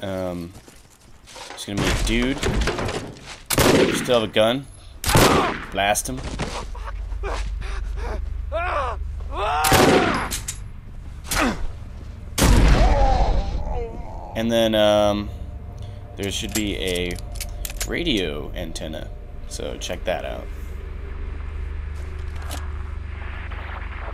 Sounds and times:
Gunshot, gunfire: 3.6 - 4.0, 5.1 - 5.7, 9.7 - 10.3, 12.4 - 13.0.

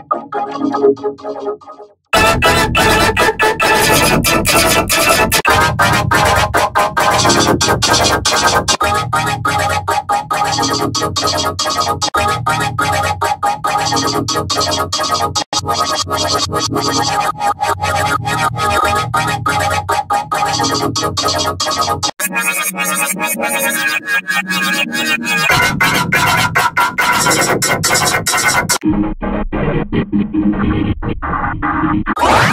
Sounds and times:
Music: 0.0 - 32.5
Sound effect: 0.0 - 32.5.

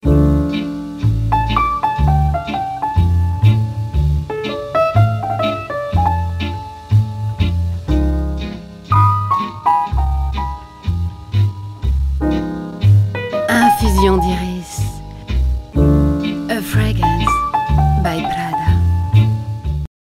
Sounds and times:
Music: 0.0 - 19.9
Speech: 13.5 - 15.0, 16.5 - 17.4, 18.0 - 18.8.

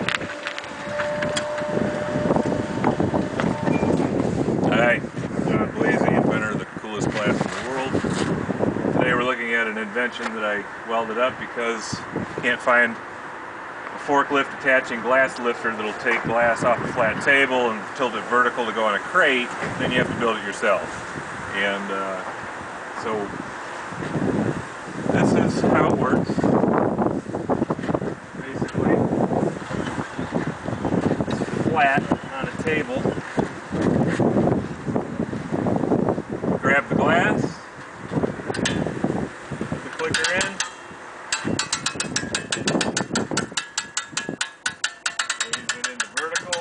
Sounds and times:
Wind noise (microphone): 0.0 - 9.5, 11.2 - 12.6, 16.1 - 17.3, 19.5 - 21.7, 22.6 - 40.6, 41.4 - 44.8.

